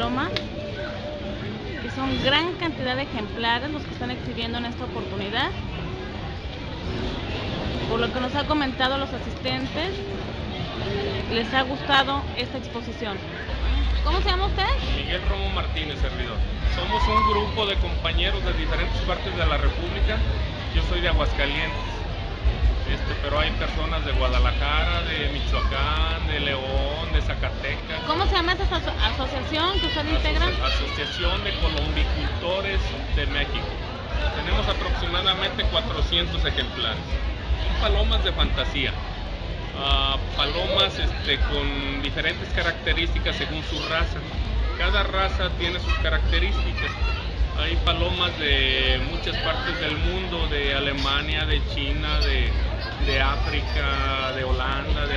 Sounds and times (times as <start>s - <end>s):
Inside, public space: 0.0s - 55.1s.